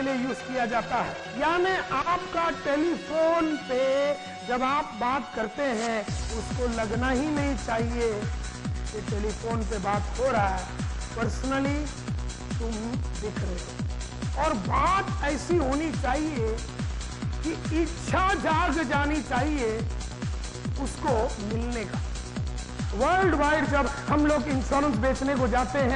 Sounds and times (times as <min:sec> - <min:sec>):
Speech: 0:00.0 - 0:08.3, 0:09.0 - 0:11.9, 0:12.6 - 0:13.7, 0:14.4 - 0:16.6, 0:17.5 - 0:19.9, 0:20.8 - 0:22.0, 0:22.9 - 0:25.9
Music: 0:00.0 - 0:25.9.